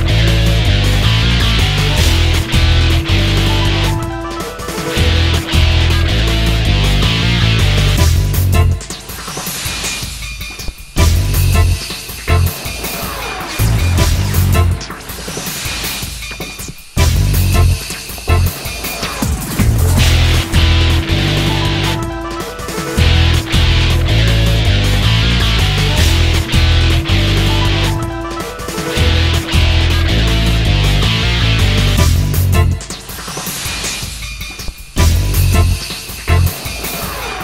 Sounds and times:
Music: 0:00.0 - 0:37.4.

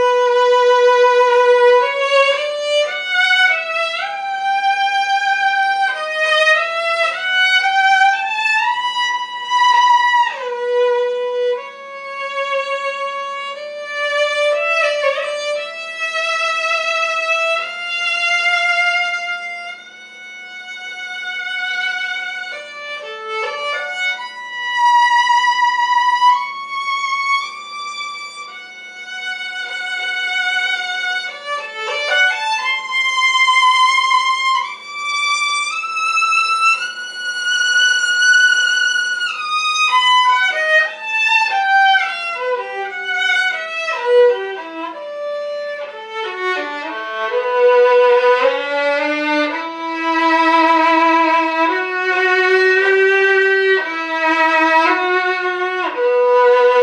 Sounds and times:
Violin, fiddle: 0:00.0 - 0:56.8.

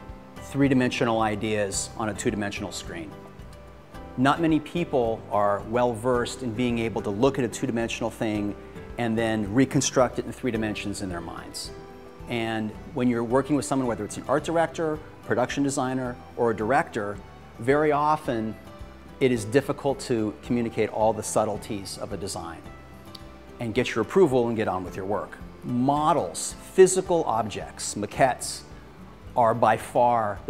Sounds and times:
Music: 0:00.0 - 0:30.5
Speech: 0:00.5 - 0:03.2, 0:04.2 - 0:11.7, 0:12.3 - 0:18.6, 0:19.2 - 0:22.7, 0:23.6 - 0:28.7, 0:29.4 - 0:30.5.

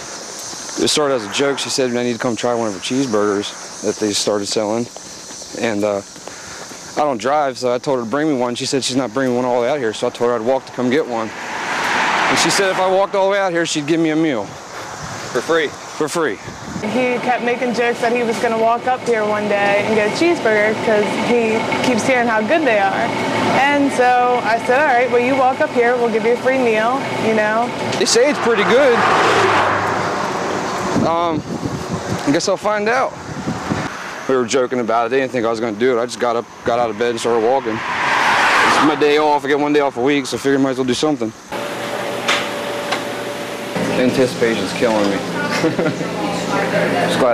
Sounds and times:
Speech: 0:00.8 - 0:04.9, 0:12.3 - 0:14.5, 0:15.4 - 0:29.0, 0:32.2 - 0:33.2, 0:34.3 - 0:37.8, 0:38.8 - 0:41.4, 0:43.9 - 0:47.3.

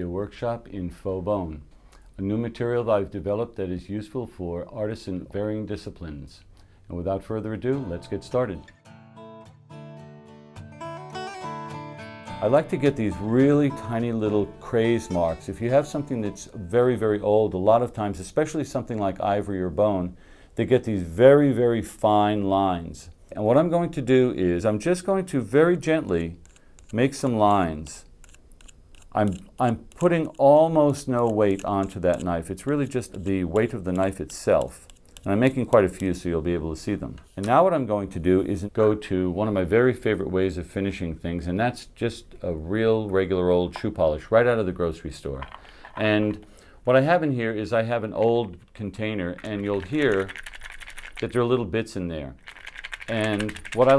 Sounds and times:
Speech: 0:00.0 - 0:01.6, 0:02.2 - 0:08.7, 0:12.4 - 0:28.1, 0:29.2 - 0:50.4, 0:51.2 - 0:52.4, 0:53.1 - 0:53.9.

